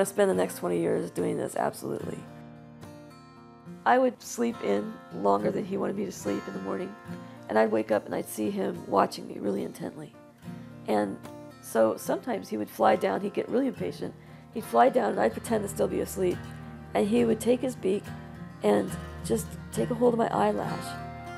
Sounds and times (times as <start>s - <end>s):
Speech: 0.0s - 2.2s, 3.9s - 10.1s, 10.9s - 16.4s, 17.0s - 18.0s, 18.6s - 21.0s
Music: 0.0s - 21.3s.